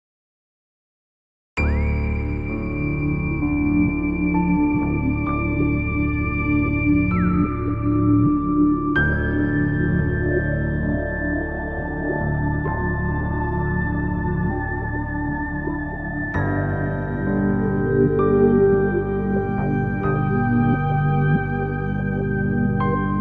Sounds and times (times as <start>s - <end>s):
Ambient music: 1.6s - 23.2s
New-age music: 1.6s - 23.2s.